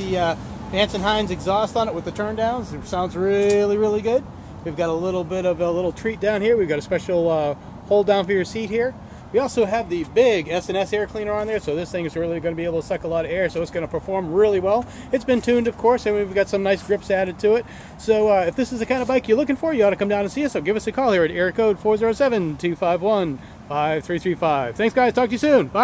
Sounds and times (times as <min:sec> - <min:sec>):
Speech: 0:00.0 - 0:25.8.